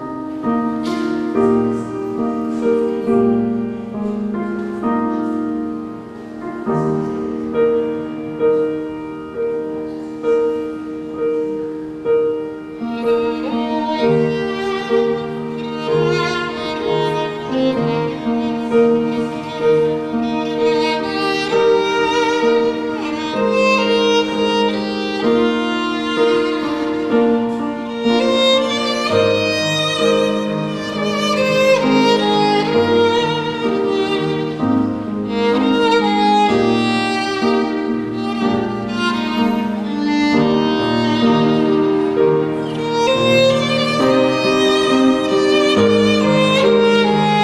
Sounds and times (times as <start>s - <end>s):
Violin, fiddle: 0.0s - 47.4s.